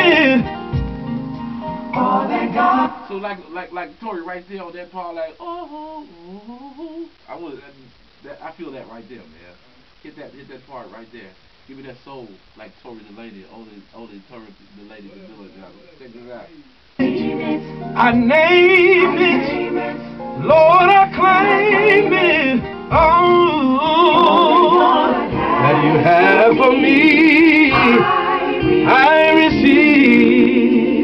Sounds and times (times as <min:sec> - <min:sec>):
Music: 0:00.0 - 0:03.1, 0:16.6 - 0:31.0
Speech: 0:07.3 - 0:16.7.